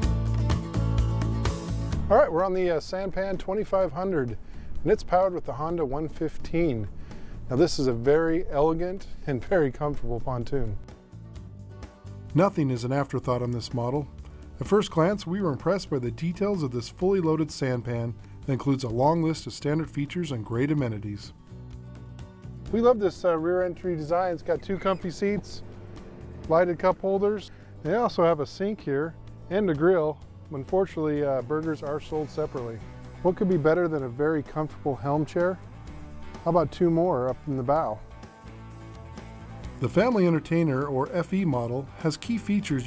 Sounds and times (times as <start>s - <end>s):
Music: 0.0s - 42.8s
Speech: 2.1s - 6.9s, 7.5s - 10.8s, 12.3s - 21.4s, 22.7s - 25.6s, 26.4s - 35.6s, 36.4s - 38.0s, 39.8s - 42.8s.